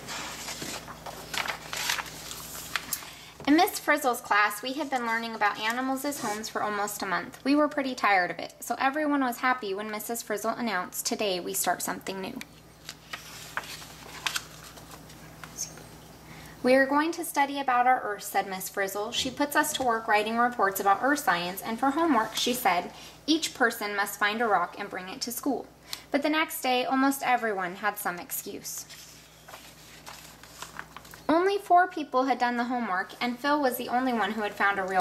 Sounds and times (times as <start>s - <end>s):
Speech: 3.5s - 12.5s, 16.6s - 28.9s, 31.3s - 35.0s.